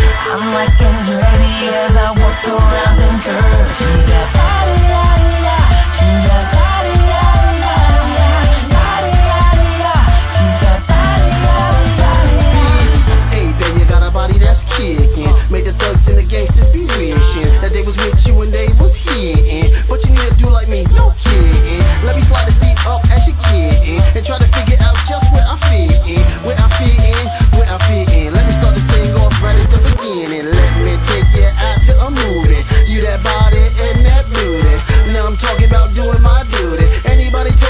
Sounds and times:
Music: 0.0s - 37.7s.

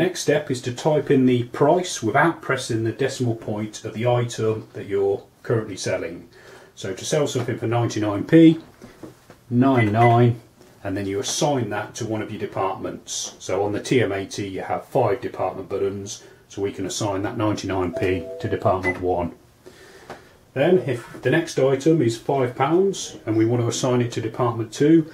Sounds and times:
Speech: 0.0s - 8.7s, 9.5s - 19.4s, 20.6s - 25.1s.

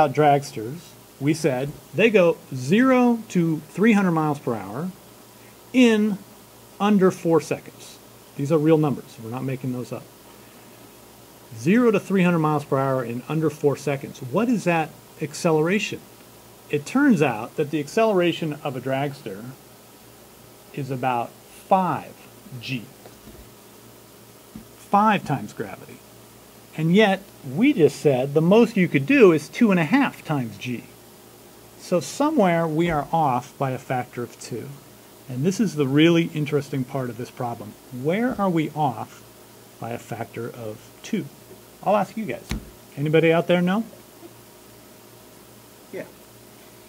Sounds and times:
Speech: 0.0s - 5.0s, 5.7s - 6.2s, 6.8s - 10.1s, 11.6s - 16.1s, 16.7s - 19.6s, 20.8s - 23.0s, 24.8s - 26.0s, 26.8s - 31.0s, 31.8s - 44.0s, 45.9s - 46.2s.

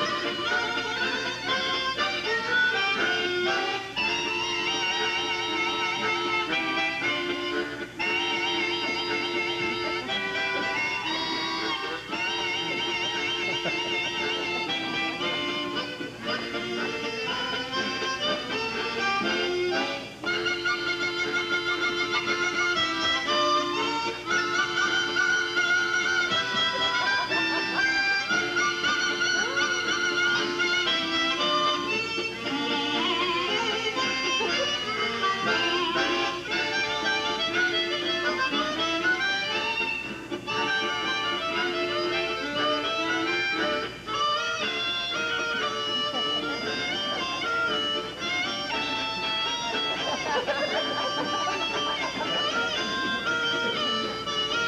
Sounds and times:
Harmonica: 0.0s - 54.6s.

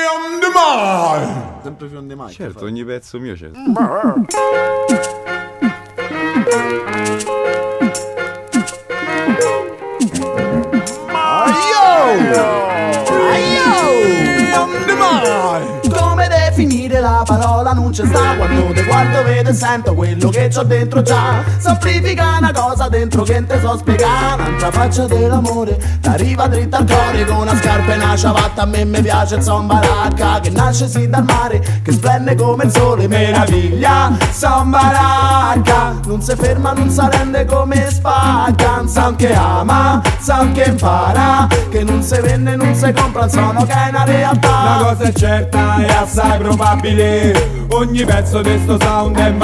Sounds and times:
Music: 4.3s - 49.4s.

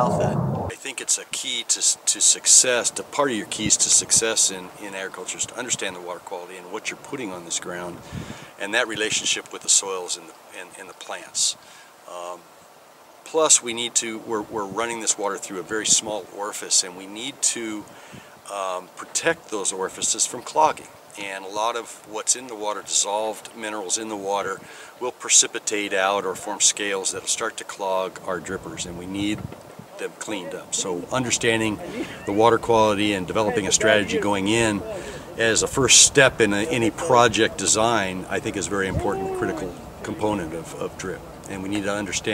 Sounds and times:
Speech: 0.0s - 8.0s, 8.6s - 12.4s, 13.3s - 17.9s, 18.5s - 29.4s, 30.0s - 42.3s.

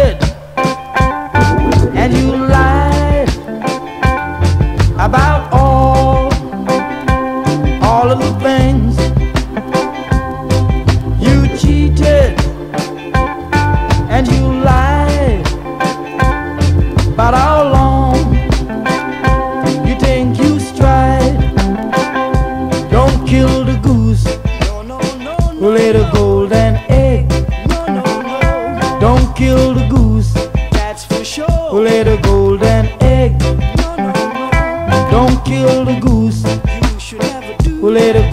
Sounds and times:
Music: 0.0s - 38.3s.

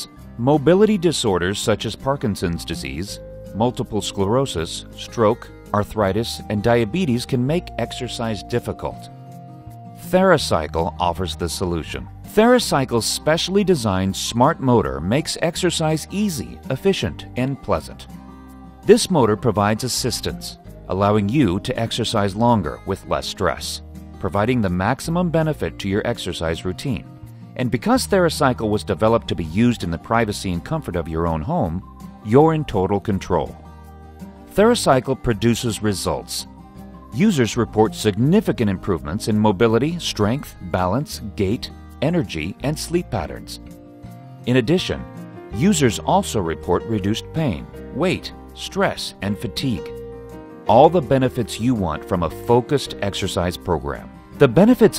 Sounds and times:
Speech: 0.0s - 9.1s, 10.0s - 18.1s, 18.9s - 33.6s, 34.5s - 36.5s, 37.2s - 43.7s, 44.4s - 49.9s, 50.7s - 54.9s
Music: 0.0s - 54.9s.

